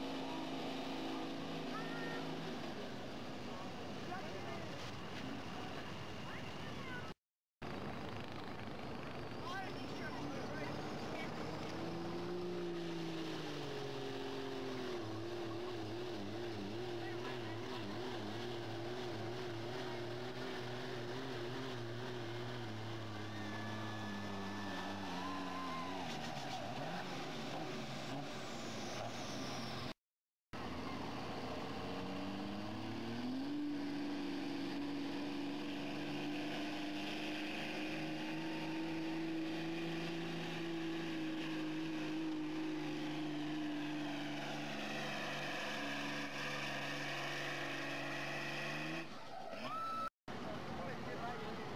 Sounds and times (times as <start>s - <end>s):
Truck: 0.0s - 51.7s
Speech: 1.7s - 2.3s, 3.5s - 4.9s, 5.5s - 7.2s, 9.4s - 11.4s, 17.0s - 18.0s, 50.4s - 51.7s.